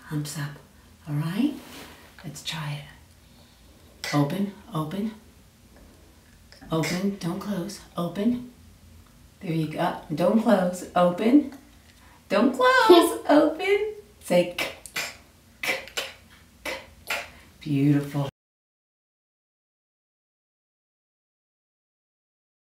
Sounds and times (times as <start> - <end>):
Speech: 0.0 - 1.6, 4.0 - 5.2, 6.6 - 8.5, 9.4 - 11.6, 12.3 - 14.8, 16.7 - 18.4.